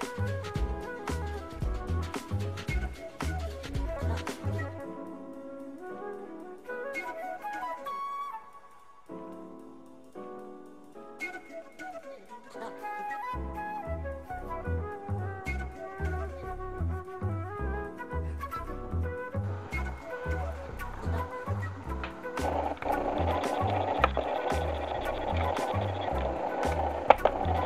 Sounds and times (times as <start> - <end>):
Clarinet: 0.0 - 9.6, 11.2 - 27.6.